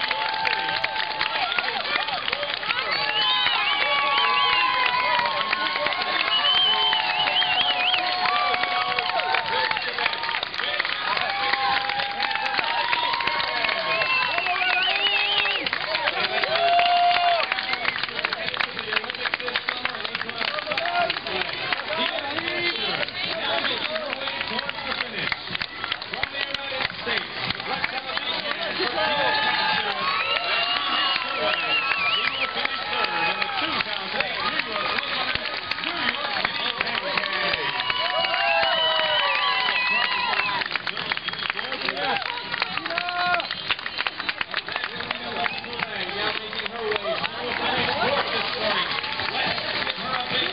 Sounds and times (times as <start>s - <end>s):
Outside, urban or manmade: 0.0s - 50.5s
Speech: 0.1s - 38.6s, 39.3s - 50.5s.